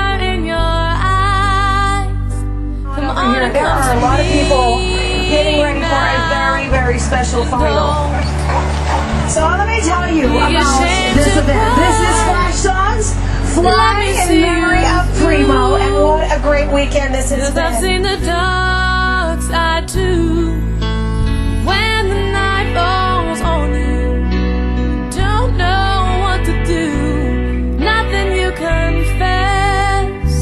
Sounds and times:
Music: 0:00.0 - 0:30.4
Speech: 0:02.9 - 0:08.6, 0:09.3 - 0:18.6.

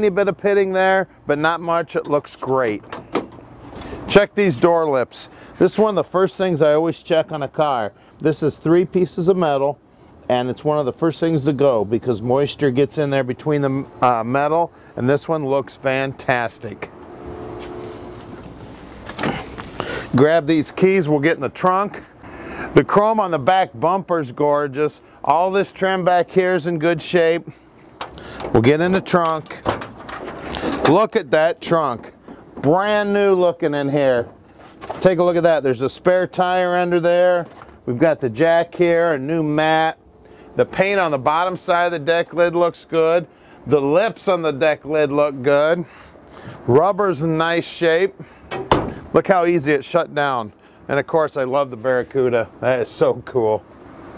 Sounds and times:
Speech: 0:00.0 - 0:02.9, 0:04.1 - 0:16.9, 0:20.1 - 0:22.1, 0:22.8 - 0:27.6, 0:28.5 - 0:29.8, 0:30.8 - 0:34.4, 0:35.0 - 0:40.0, 0:40.6 - 0:45.9, 0:46.7 - 0:48.2, 0:49.1 - 0:53.7
Outside, urban or manmade: 0:00.0 - 0:54.1
Car: 0:16.6 - 0:19.8.

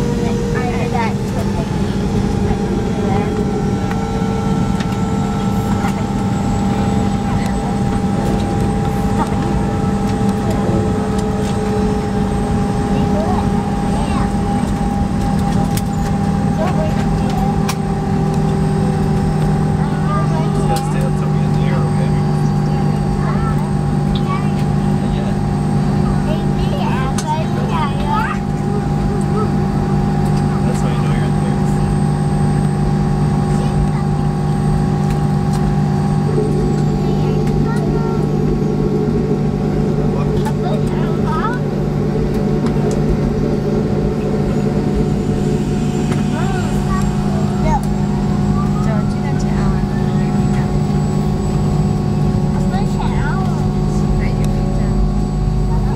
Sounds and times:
Aircraft: 0:00.0 - 0:55.9
Heavy engine (low frequency): 0:00.0 - 0:55.9
Speech: 0:00.1 - 0:03.5, 0:19.8 - 0:29.7, 0:30.4 - 0:32.0, 0:37.0 - 0:38.3, 0:40.2 - 0:41.7, 0:46.3 - 0:47.9, 0:48.5 - 0:51.1, 0:52.6 - 0:55.9.

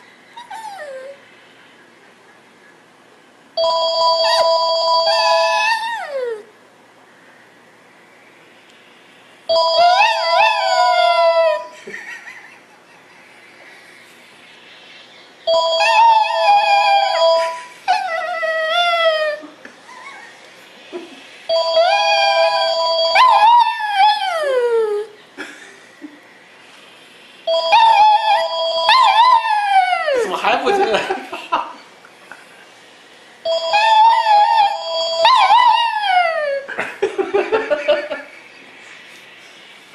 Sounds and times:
Speech: 0:30.2 - 0:31.2.

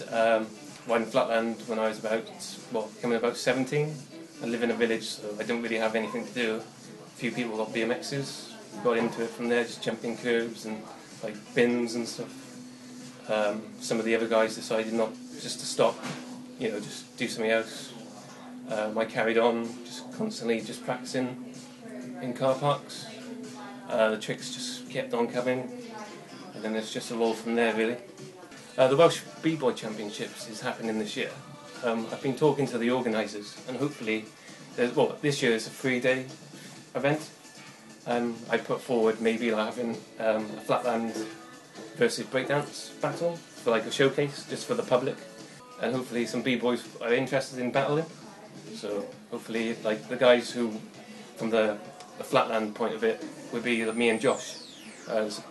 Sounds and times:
Speech: 0:00.0 - 0:12.4, 0:13.3 - 0:28.0, 0:28.8 - 0:36.3, 0:36.9 - 0:37.3, 0:38.0 - 0:41.4, 0:42.0 - 0:45.2, 0:45.8 - 0:55.5
Music: 0:00.0 - 0:55.5.

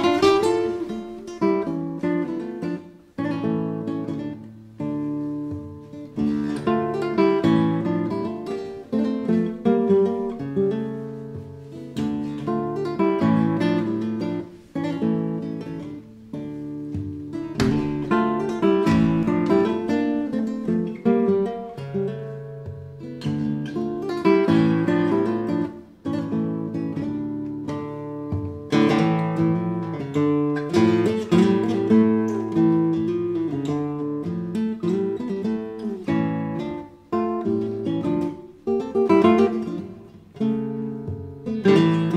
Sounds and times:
Guitar: 0:00.0 - 0:42.1.

